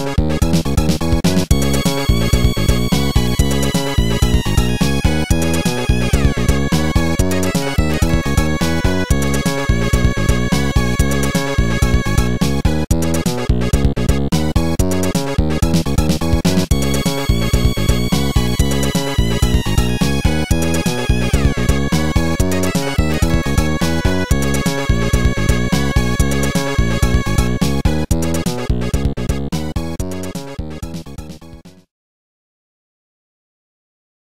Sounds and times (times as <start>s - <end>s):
Video game music: 0.0s - 31.9s.